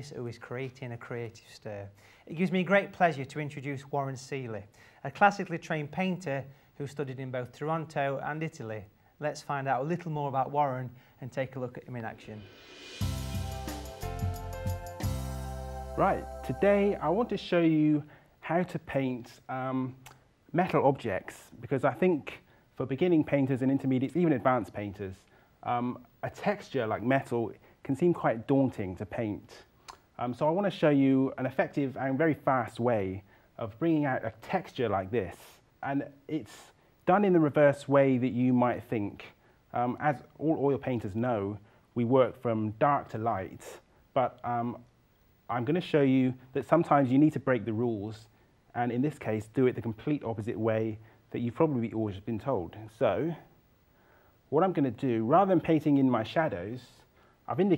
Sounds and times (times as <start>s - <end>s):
Speech: 0.0s - 12.5s, 16.0s - 44.9s, 45.5s - 53.5s, 54.5s - 57.7s.